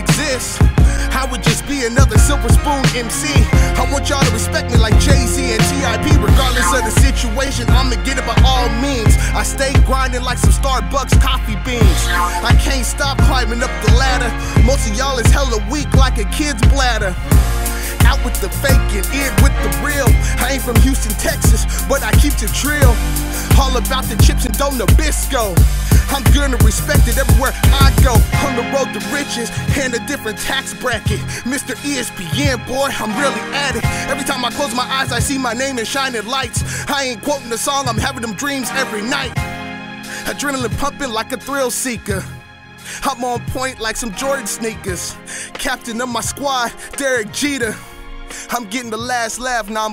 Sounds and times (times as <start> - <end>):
Rapping: 0.0 - 39.4, 40.2 - 42.4, 43.0 - 49.9
Hip hop music: 0.0 - 49.9.